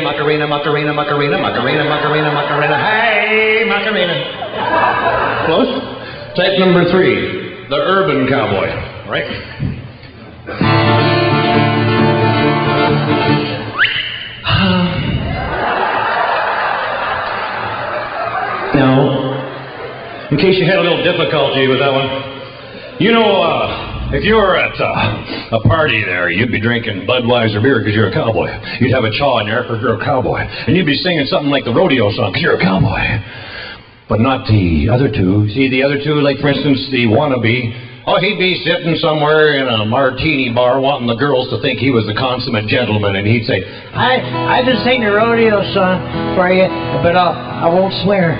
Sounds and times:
Speech: 0:00.0 - 0:04.4, 0:05.4 - 0:09.8, 0:20.3 - 0:22.3, 0:23.0 - 0:33.2, 0:34.1 - 0:48.3
Music: 0:10.5 - 0:13.8, 0:44.0 - 0:48.3.

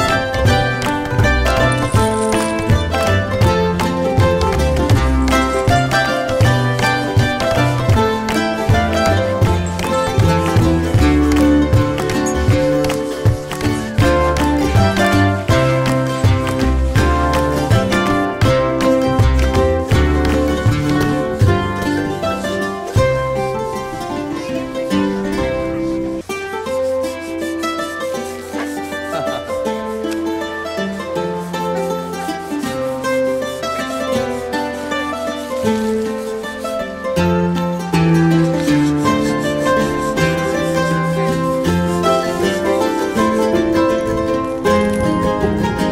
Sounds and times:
Flamenco: 0:00.0 - 0:45.9.

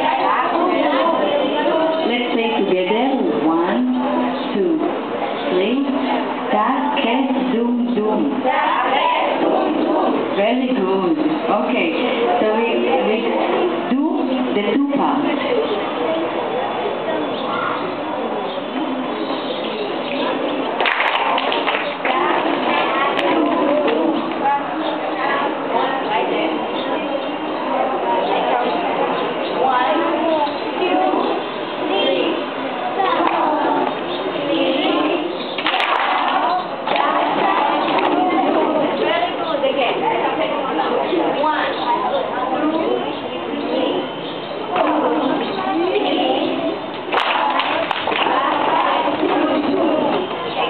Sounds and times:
Speech: 0:00.0 - 0:20.6, 0:21.9 - 0:50.7.

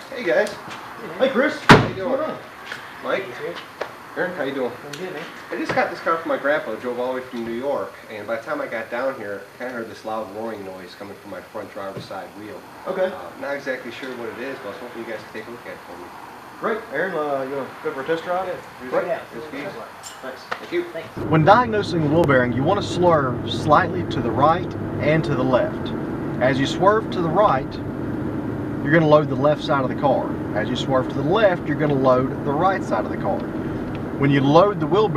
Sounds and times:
Speech: 0:00.0 - 0:03.6, 0:04.2 - 0:27.8, 0:28.8 - 0:33.4, 0:34.2 - 0:35.1.

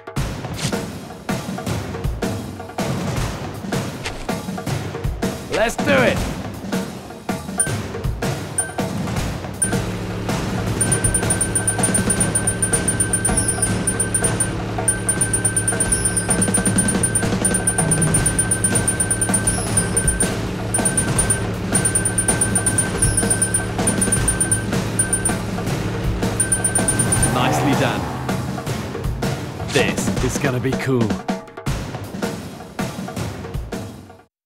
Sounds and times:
Music: 0:00.0 - 0:34.3
Speech: 0:05.5 - 0:06.3, 0:27.4 - 0:28.1, 0:29.7 - 0:31.2.

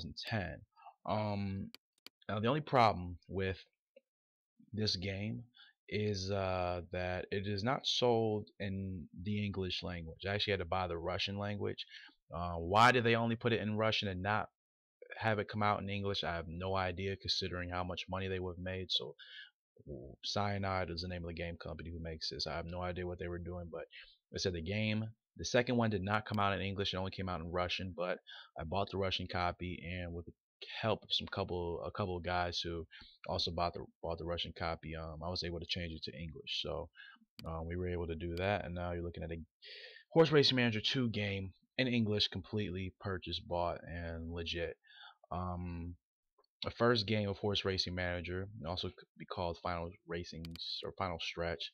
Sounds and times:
Speech: 0:00.0 - 0:03.7, 0:04.8 - 0:19.2, 0:19.9 - 0:46.0, 0:46.6 - 0:51.7.

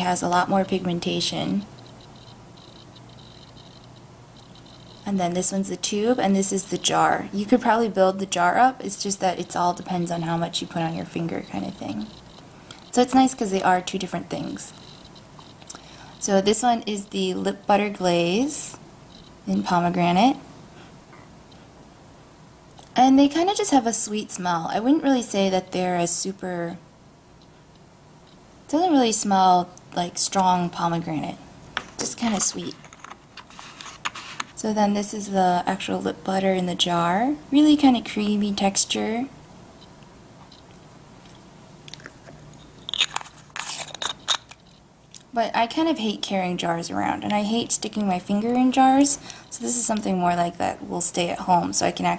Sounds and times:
Speech: 0:00.0 - 0:01.7, 0:05.1 - 0:12.1, 0:12.9 - 0:14.8, 0:16.2 - 0:18.8, 0:19.5 - 0:20.4, 0:23.0 - 0:26.8, 0:28.7 - 0:31.4, 0:32.0 - 0:32.8, 0:34.6 - 0:39.4, 0:45.4 - 0:52.1
Inside, small room: 0:00.0 - 0:52.1.

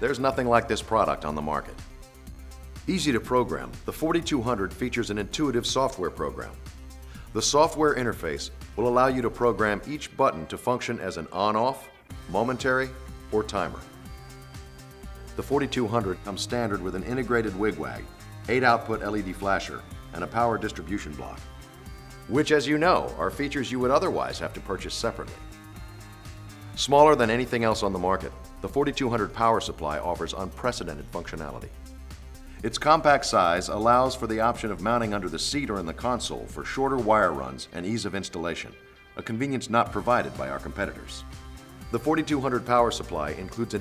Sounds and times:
Speech: 0:00.0 - 0:01.8, 0:02.9 - 0:06.6, 0:07.3 - 0:13.9, 0:15.4 - 0:21.4, 0:22.3 - 0:25.4, 0:26.8 - 0:31.7, 0:32.6 - 0:41.2, 0:41.9 - 0:43.8
Music: 0:00.0 - 0:43.8.

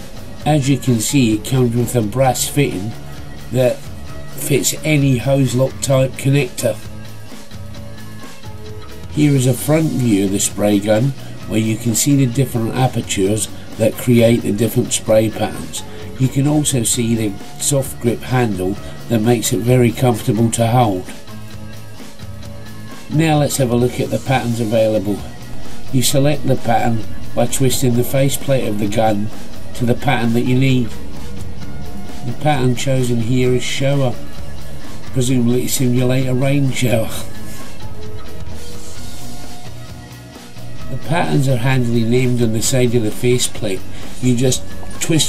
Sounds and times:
Music: 0:00.0 - 0:45.2
Speech: 0:00.4 - 0:03.8, 0:04.4 - 0:06.8, 0:09.1 - 0:21.2, 0:23.1 - 0:25.3, 0:25.9 - 0:31.0, 0:32.2 - 0:34.2, 0:35.1 - 0:37.3, 0:40.9 - 0:45.2.

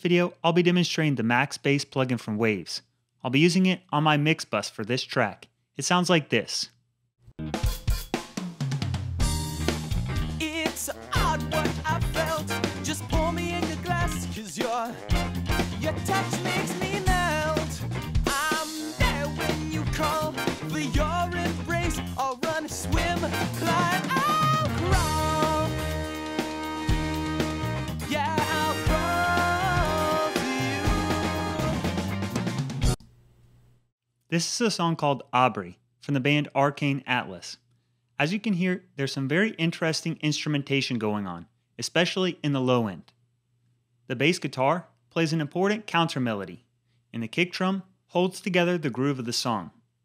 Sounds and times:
Music: 0:07.3 - 0:33.0.

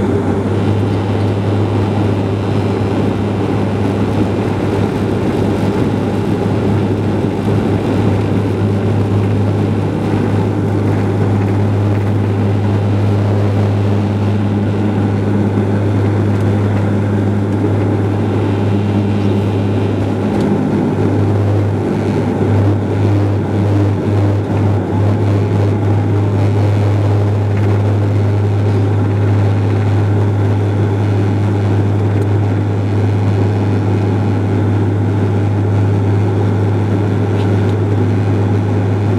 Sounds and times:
Propeller, airscrew: 0:00.0 - 0:39.1.

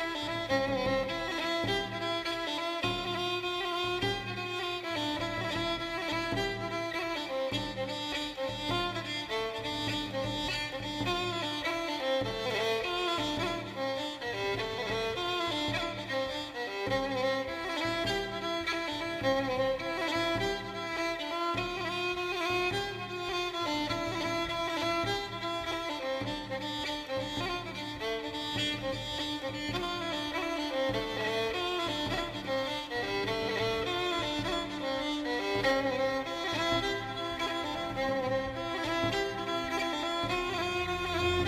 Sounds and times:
Cello: 0:00.0 - 0:41.4.

